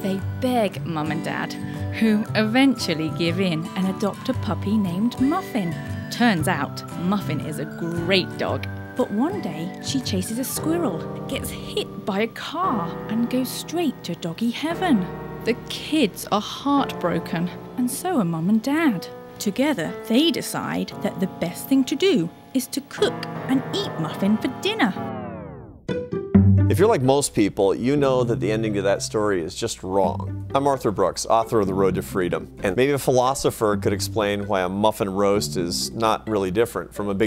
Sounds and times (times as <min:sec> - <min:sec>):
Speech: 0:00.0 - 0:25.0, 0:26.7 - 0:37.2
Music: 0:00.0 - 0:37.2.